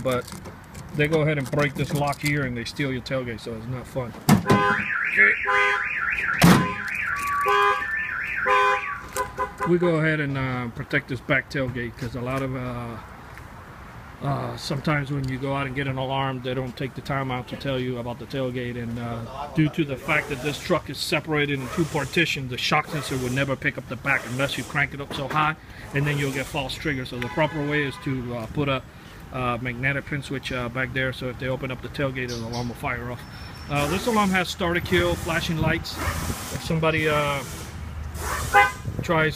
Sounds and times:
Car: 0.0 - 39.3
Speech: 1.0 - 4.2, 9.7 - 13.0, 14.2 - 28.8, 29.4 - 36.0, 36.6 - 37.5, 39.0 - 39.3.

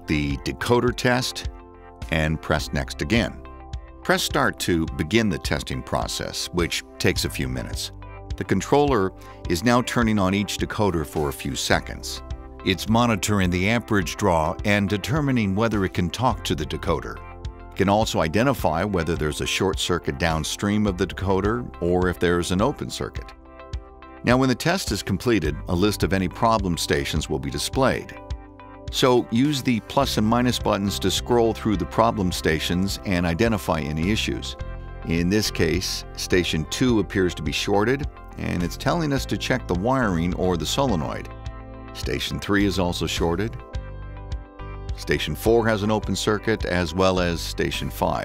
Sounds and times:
Speech: 0.0 - 3.4, 4.0 - 17.2, 17.8 - 23.3, 24.2 - 28.2, 28.9 - 41.3, 42.0 - 43.6, 45.0 - 48.2
Music: 0.0 - 48.2.

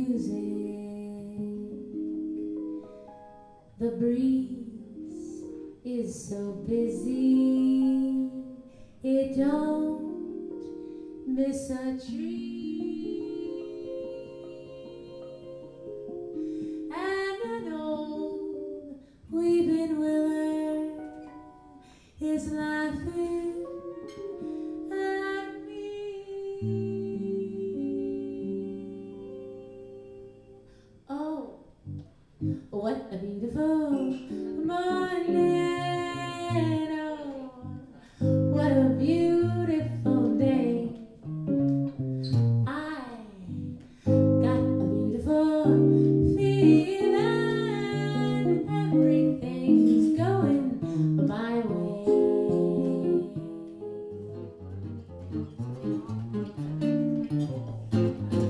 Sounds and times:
Acoustic guitar: 0.0 - 58.4.

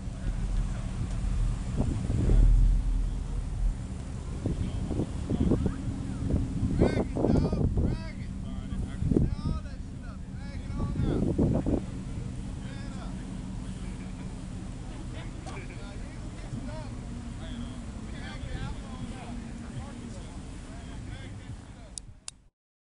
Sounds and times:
Speech: 4.4 - 22.1.

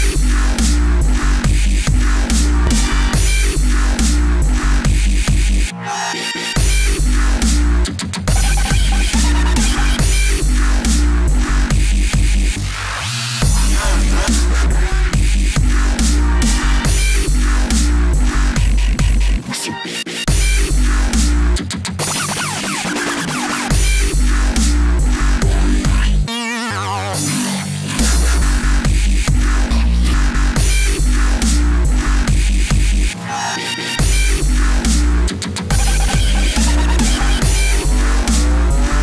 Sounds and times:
Dubstep: 0.0 - 39.0.

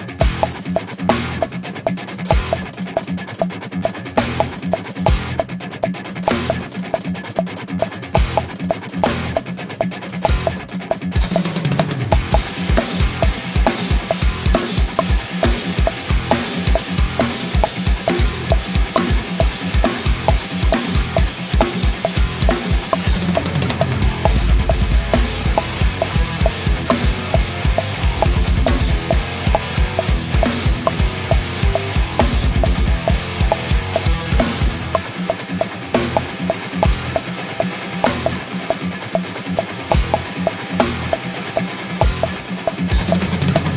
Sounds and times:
Drum kit: 0.0 - 43.7.

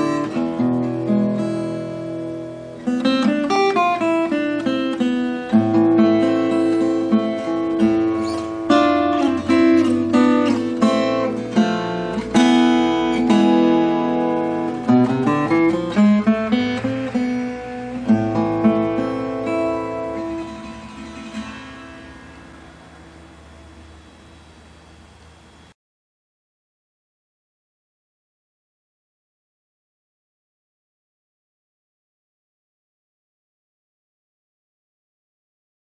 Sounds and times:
Acoustic guitar: 0.0 - 25.7.

